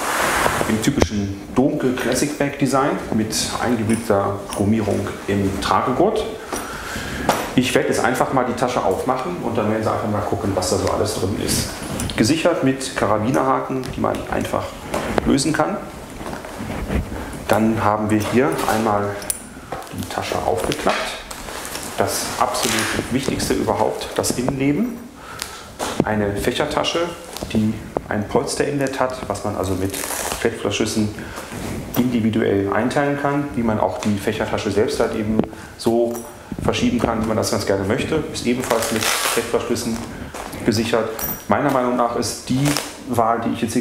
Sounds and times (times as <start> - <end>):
Speech: 0.6 - 6.4, 7.6 - 15.9, 17.5 - 21.3, 22.0 - 25.1, 26.0 - 31.2, 31.9 - 43.8.